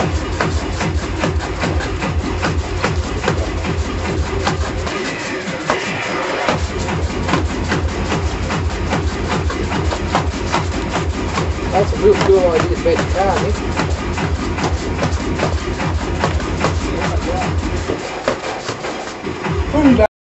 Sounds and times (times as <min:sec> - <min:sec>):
Music: 0:00.0 - 0:20.1
Speech: 0:11.7 - 0:13.6, 0:16.9 - 0:17.6, 0:19.7 - 0:20.1.